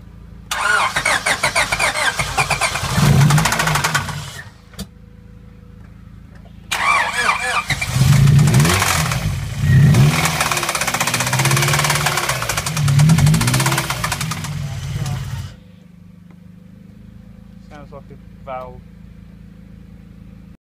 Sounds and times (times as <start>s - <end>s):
Car: 0.0s - 20.6s
Accelerating, revving, vroom: 2.7s - 4.2s, 7.7s - 14.5s
Speech: 14.6s - 15.4s, 17.6s - 18.8s.